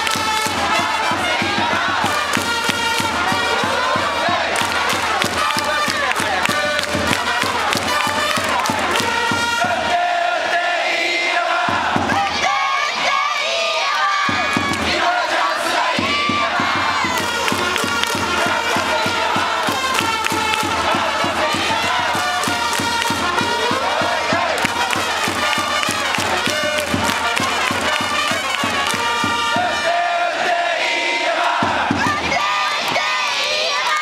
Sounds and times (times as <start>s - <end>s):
Music: 0.0s - 34.0s.